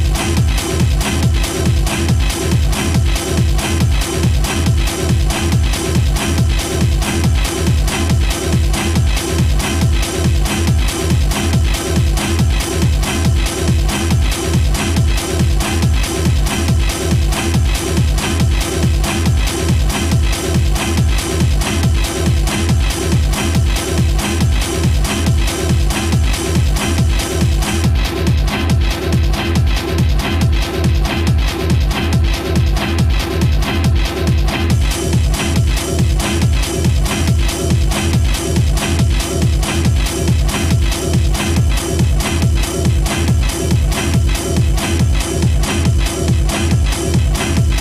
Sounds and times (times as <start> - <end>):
Techno: 0.0 - 47.8.